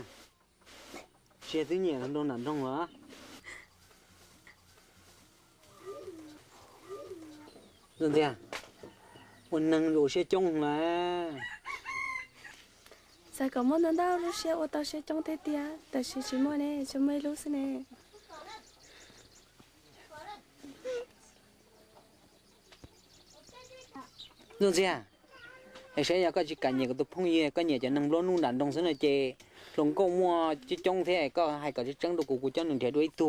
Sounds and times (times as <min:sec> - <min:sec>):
Crowing, cock-a-doodle-doo: 0:11.3 - 0:12.6.